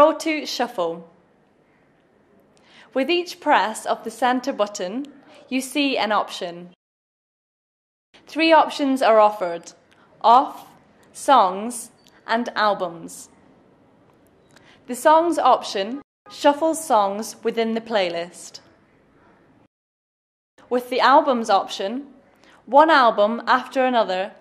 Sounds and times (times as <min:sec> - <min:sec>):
Speech: 0:00.0 - 0:01.1, 0:02.9 - 0:06.8, 0:08.3 - 0:13.3, 0:14.9 - 0:18.7, 0:20.6 - 0:22.1, 0:22.7 - 0:24.4.